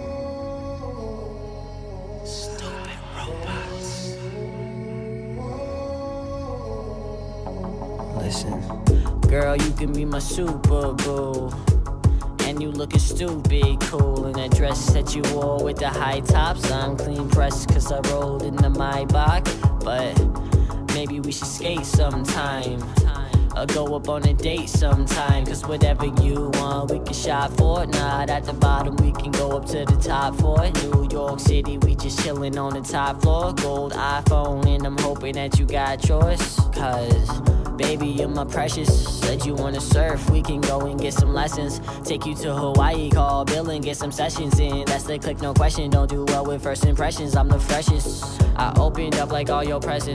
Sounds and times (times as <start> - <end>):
Music: 0.0 - 50.1.